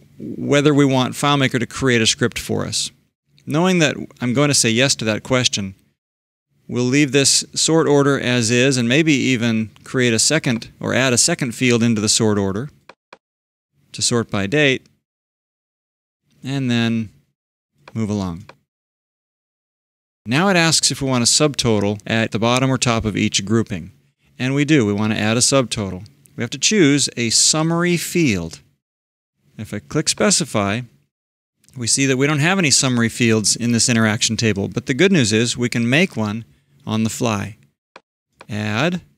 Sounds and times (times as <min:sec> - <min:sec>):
Speech: 0:00.2 - 0:05.8, 0:06.7 - 0:12.8, 0:13.9 - 0:14.9, 0:16.4 - 0:17.2, 0:17.9 - 0:18.6, 0:20.3 - 0:28.7, 0:29.6 - 0:31.0, 0:31.7 - 0:37.6, 0:38.4 - 0:39.1.